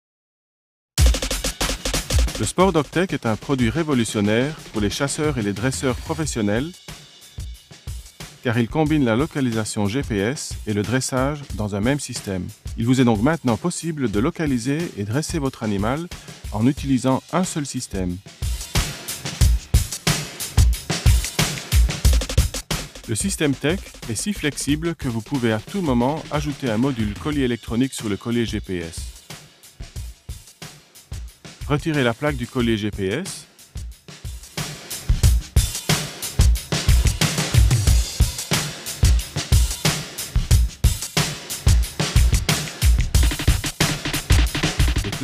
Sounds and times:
Music: 1.0s - 45.2s
Speech: 2.4s - 6.8s, 8.4s - 18.2s, 23.1s - 29.1s, 31.6s - 33.5s.

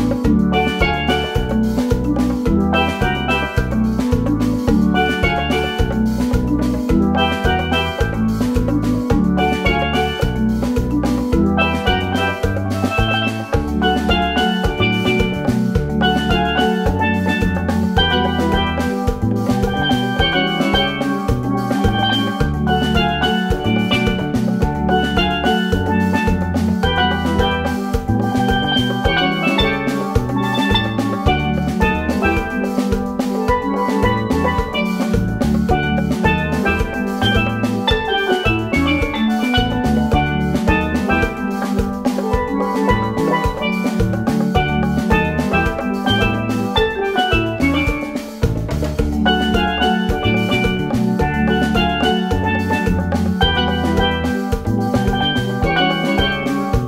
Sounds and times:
Musical instrument: 0.0s - 56.8s.

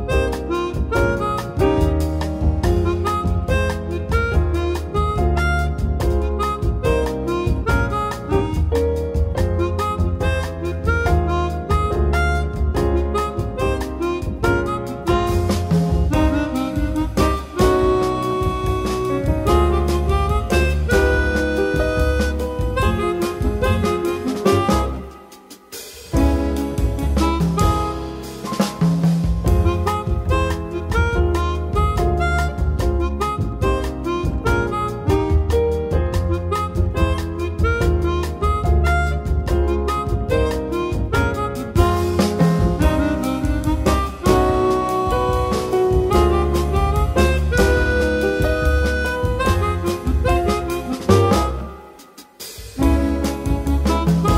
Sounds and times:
Harmonica: 0.0s - 28.7s, 29.4s - 54.3s
Wind instrument, woodwind instrument: 0.0s - 54.3s.

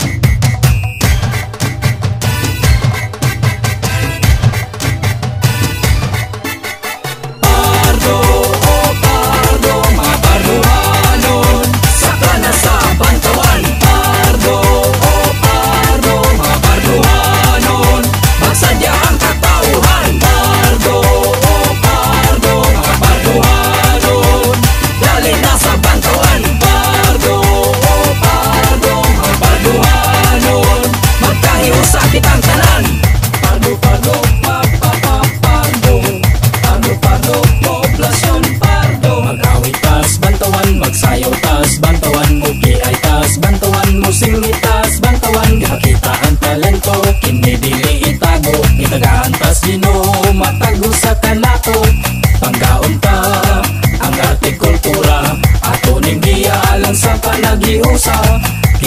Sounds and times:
Jingle (music): 0.0s - 58.8s.

